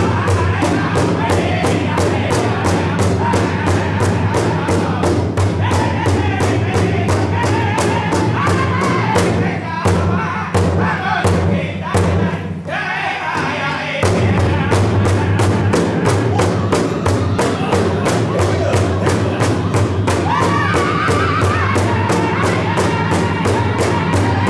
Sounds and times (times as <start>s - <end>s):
Music: 0.0s - 24.4s.